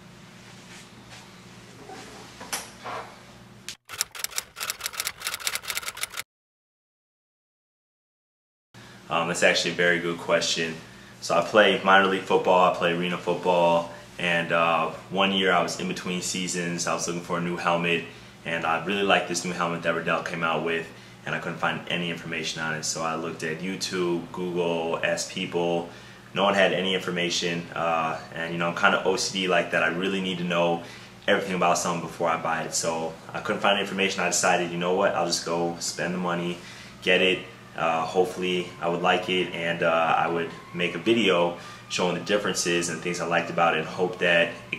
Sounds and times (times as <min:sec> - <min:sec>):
Speech: 0:09.1 - 0:44.7.